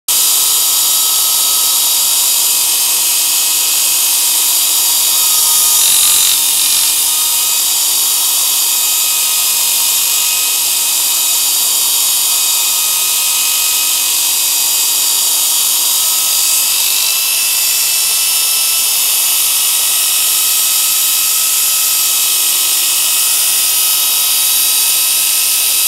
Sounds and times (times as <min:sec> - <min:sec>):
Inside, small room: 0:00.1 - 0:25.8
Tools: 0:00.1 - 0:25.8.